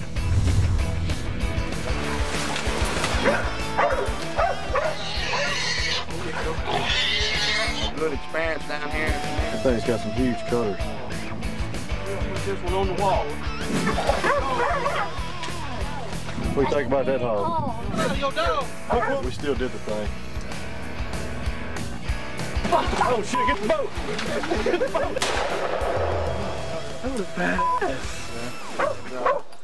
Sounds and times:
Music: 0:00.0 - 0:29.6.

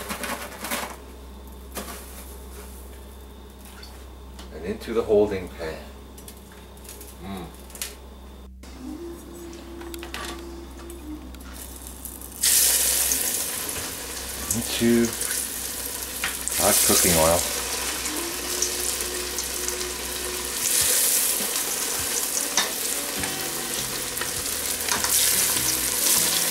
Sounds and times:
Speech: 0:04.5 - 0:05.9, 0:14.4 - 0:15.2, 0:16.6 - 0:17.5
Music: 0:08.6 - 0:26.5
Frying (food): 0:11.6 - 0:26.5.

